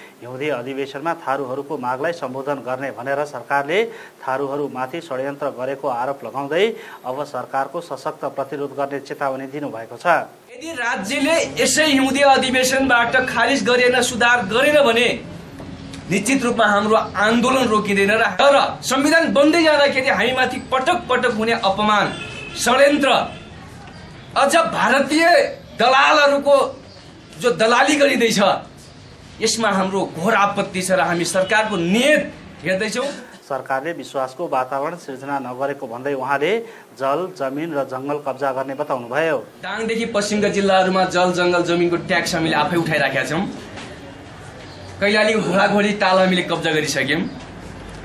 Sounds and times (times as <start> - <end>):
Speech: 0.2 - 15.2, 16.1 - 26.8, 27.4 - 28.7, 29.4 - 43.6, 45.0 - 47.4.